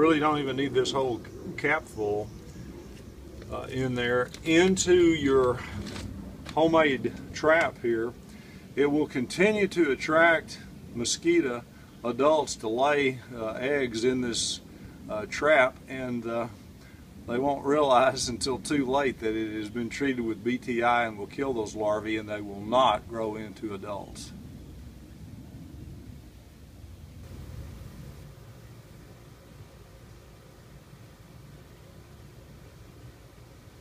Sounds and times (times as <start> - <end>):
Speech: 0.0 - 2.3, 3.5 - 5.8, 6.5 - 8.2, 8.8 - 16.6, 17.3 - 24.4.